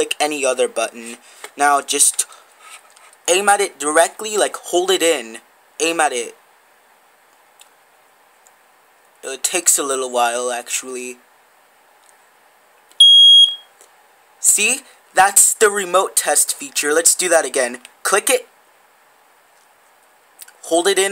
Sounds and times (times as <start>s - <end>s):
Speech: 0.0s - 2.3s, 3.3s - 6.4s, 9.2s - 11.2s, 14.4s - 18.5s, 20.6s - 21.1s.